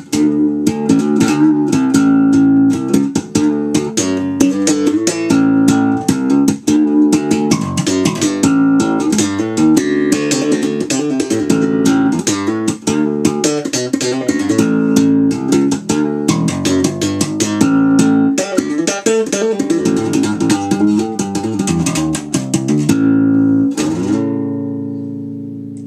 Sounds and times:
Bass guitar: 0.0 - 25.8.

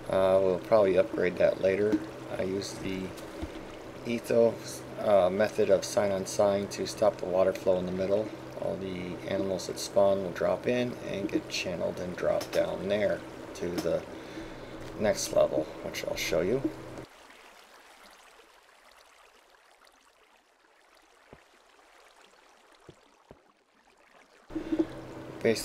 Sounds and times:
Speech: 0.1 - 3.2, 4.1 - 14.0, 15.0 - 16.7, 25.4 - 25.6.

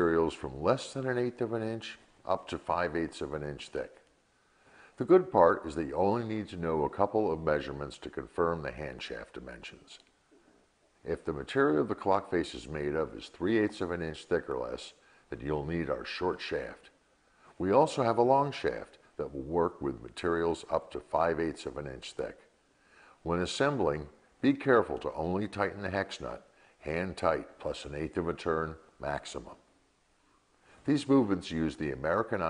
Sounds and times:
Speech: 0.0 - 4.0, 5.0 - 10.1, 11.0 - 17.0, 17.6 - 22.5, 23.2 - 29.7, 30.8 - 32.4.

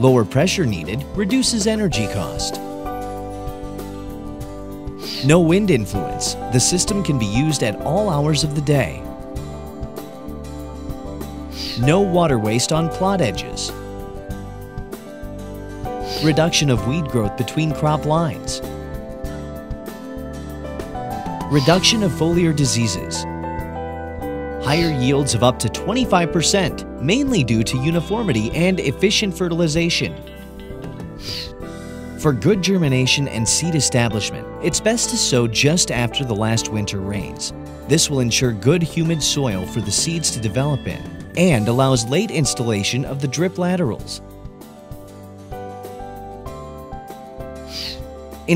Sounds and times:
Speech: 0.0 - 2.6, 5.1 - 9.1, 11.6 - 13.8, 16.1 - 18.6, 21.5 - 23.3, 24.6 - 30.3, 32.2 - 44.2, 47.8 - 48.5
Music: 0.0 - 48.5.

